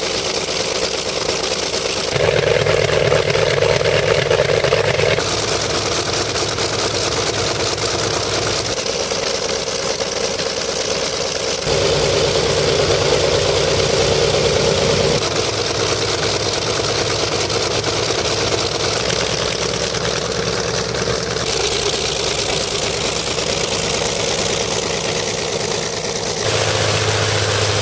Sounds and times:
Propeller, airscrew: 0.0 - 27.8.

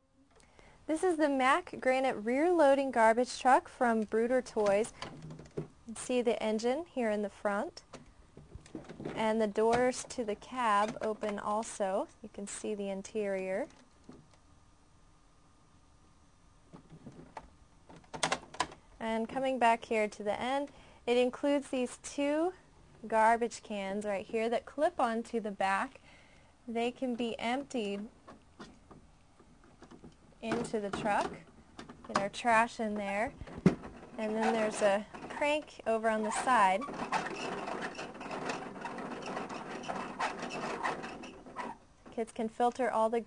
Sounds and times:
Speech: 0.9 - 4.9, 5.9 - 7.8, 9.2 - 13.7, 19.0 - 26.0, 26.7 - 28.1, 30.4 - 31.4, 32.1 - 33.4, 34.2 - 36.9, 42.1 - 43.2.

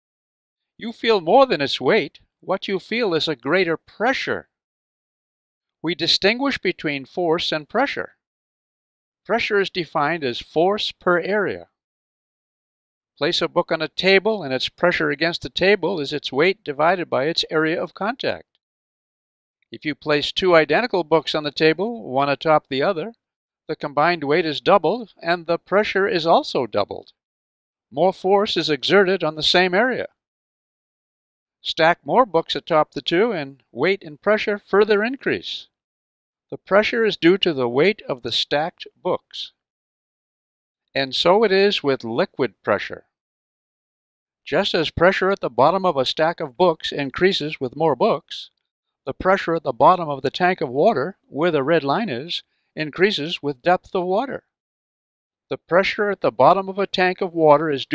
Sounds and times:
Speech: 0.8 - 4.5, 5.8 - 8.2, 9.3 - 11.8, 13.2 - 18.5, 19.8 - 27.2, 28.0 - 30.2, 31.6 - 35.7, 36.6 - 39.6, 41.0 - 43.1, 44.5 - 48.5, 49.1 - 54.5, 55.5 - 57.9.

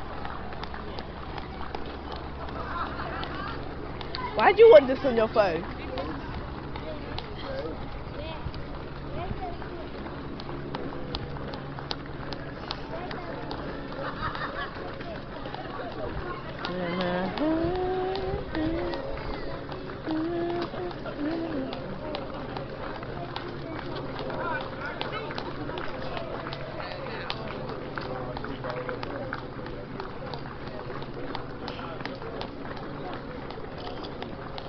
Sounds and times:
Outside, urban or manmade: 0.0 - 34.6
Run: 0.0 - 34.6
Speech: 14.8 - 34.6.

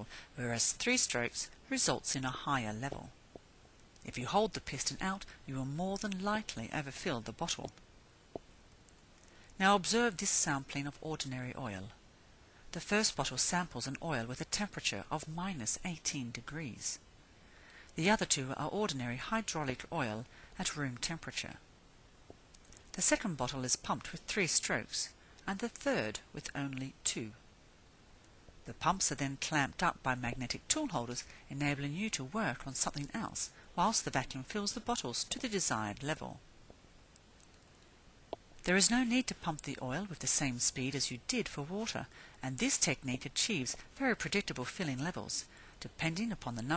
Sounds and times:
Speech: 0.0 - 3.2, 4.1 - 7.8, 9.6 - 12.0, 12.7 - 17.0, 18.0 - 21.6, 22.9 - 27.4, 28.7 - 36.4, 38.6 - 46.7.

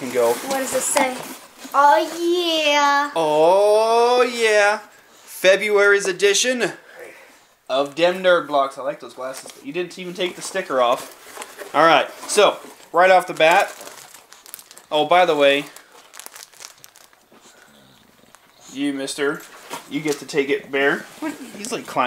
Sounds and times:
Crumpling, crinkling: 9.2 - 18.8.

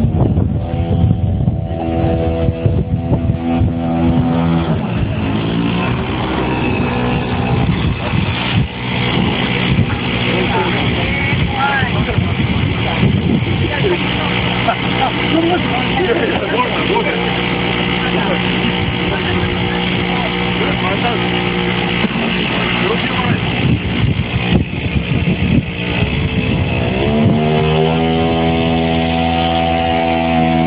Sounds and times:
Speech: 9.8 - 17.3, 18.0 - 21.4, 22.4 - 23.5.

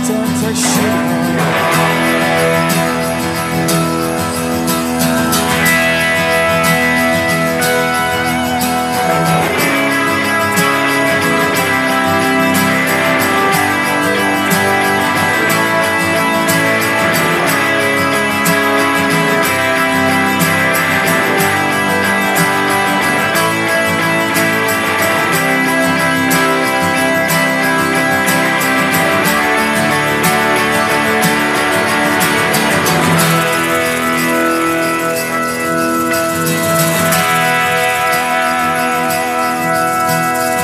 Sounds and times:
Music: 0.0 - 40.6.

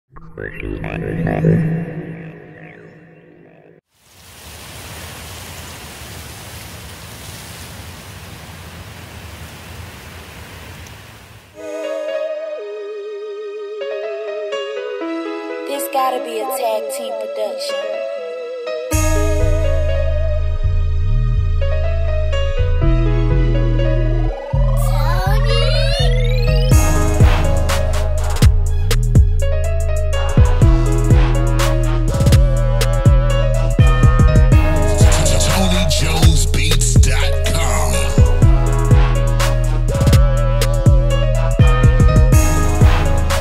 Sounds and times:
Rustle: 3.9 - 11.6.

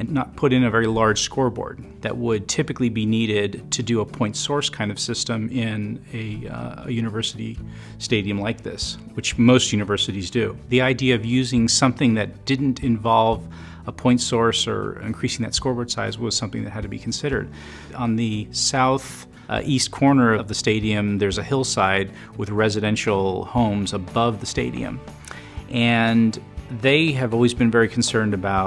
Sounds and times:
Speech: 0.0 - 25.0, 25.7 - 28.6
Music: 0.0 - 28.6.

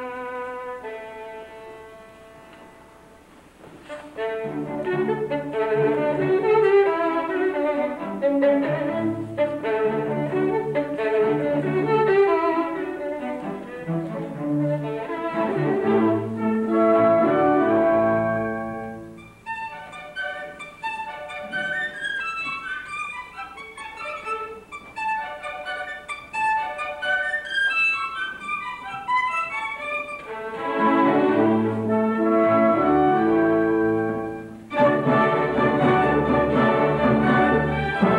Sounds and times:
Violin, fiddle: 3.8 - 31.8.

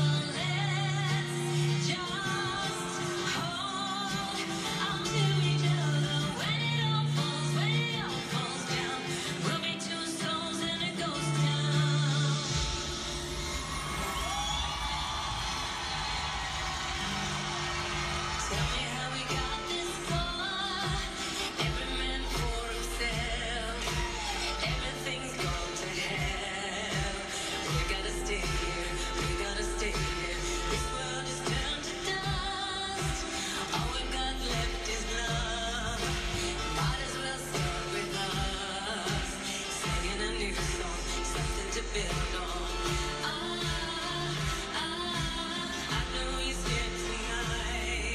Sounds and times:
Pop music: 0.0 - 48.1.

